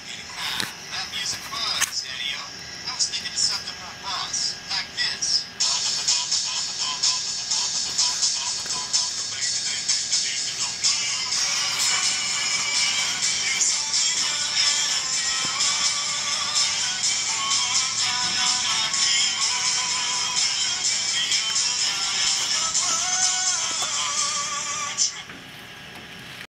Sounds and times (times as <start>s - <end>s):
Music: 3.4s - 25.3s
Male singing: 5.1s - 25.2s.